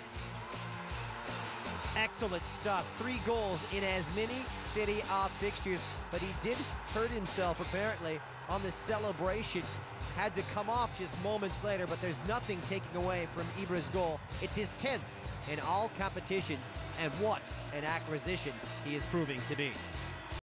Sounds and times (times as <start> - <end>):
Music: 0.0 - 20.4
Speech: 2.0 - 19.8.